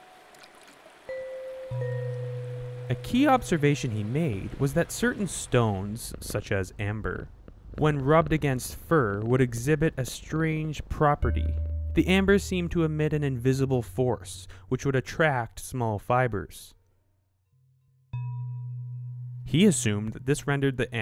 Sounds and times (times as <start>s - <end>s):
Speech: 2.9s - 16.8s, 19.5s - 21.0s.